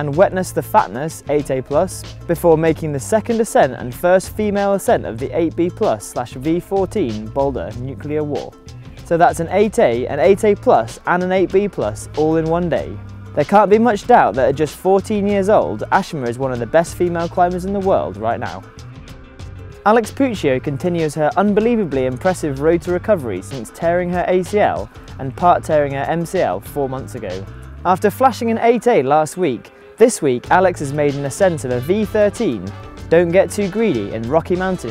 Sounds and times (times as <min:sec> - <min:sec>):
Speech: 0:00.0 - 0:18.7, 0:19.8 - 0:34.9
Music: 0:00.0 - 0:34.9.